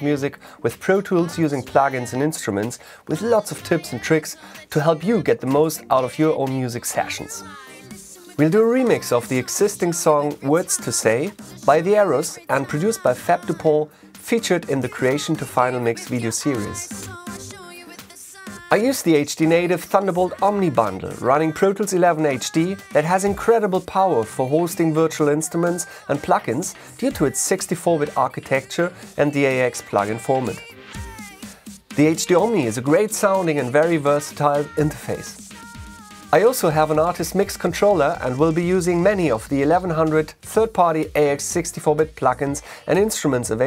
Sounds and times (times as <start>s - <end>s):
Speech: 0.0s - 7.8s, 8.4s - 17.0s, 18.6s - 30.7s, 32.0s - 35.4s, 36.3s - 43.6s
Music: 0.0s - 43.6s.